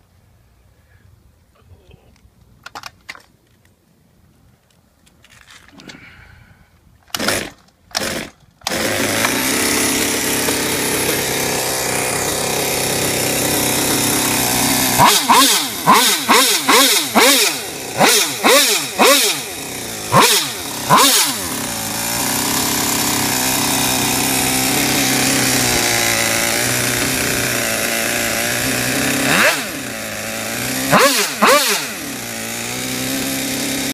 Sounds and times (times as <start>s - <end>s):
Accelerating, revving, vroom: 15.0s - 19.5s, 20.1s - 21.5s, 29.0s - 29.8s, 30.6s - 32.0s.